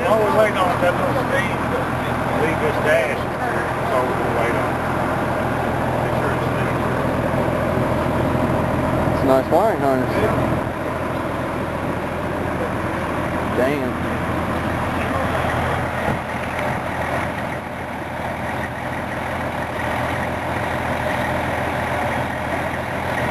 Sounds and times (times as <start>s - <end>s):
Motor vehicle (road): 0.0s - 23.3s
Speech: 13.5s - 14.0s.